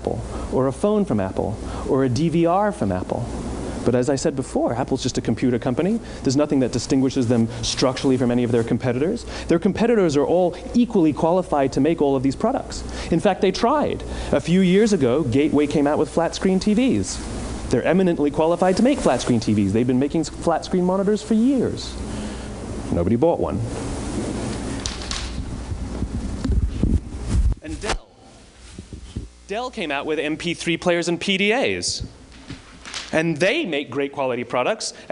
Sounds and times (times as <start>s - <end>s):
Speech: 0.0s - 22.0s, 22.9s - 23.7s, 27.6s - 28.3s, 29.5s - 32.1s, 33.1s - 35.1s.